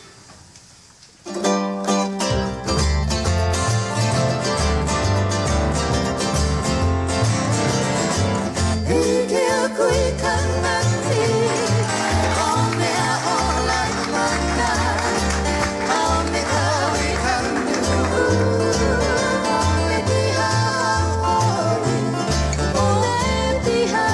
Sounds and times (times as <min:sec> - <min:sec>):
Music: 0:01.2 - 0:24.1.